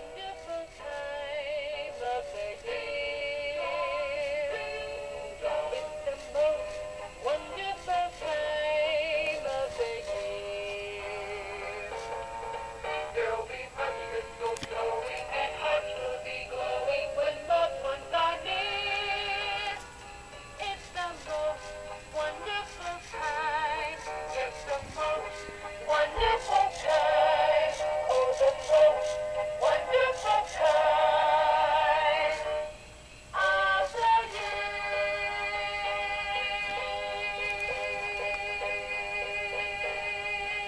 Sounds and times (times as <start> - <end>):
Music: 0.0 - 40.6
Female singing: 7.3 - 11.5.